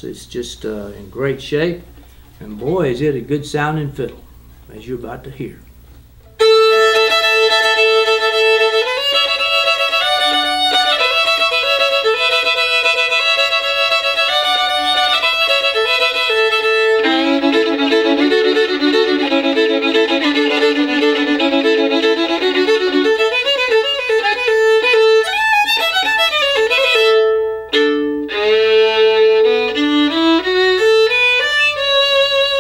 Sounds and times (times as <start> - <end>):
Violin, fiddle: 6.3 - 32.6.